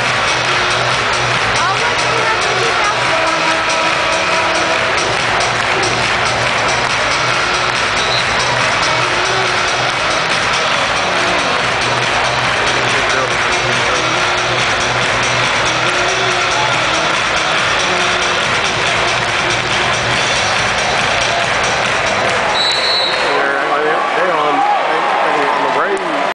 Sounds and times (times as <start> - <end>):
Music: 0.0 - 23.8
Speech: 1.6 - 3.8, 23.2 - 26.3.